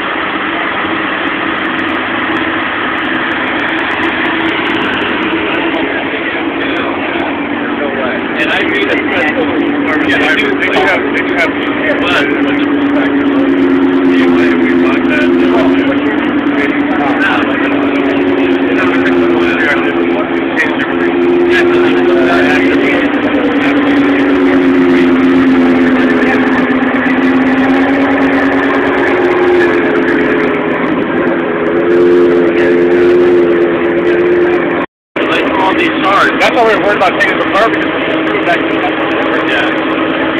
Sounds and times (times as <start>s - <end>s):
Vehicle: 0.0s - 40.3s
Speech: 5.7s - 24.5s, 35.2s - 39.8s.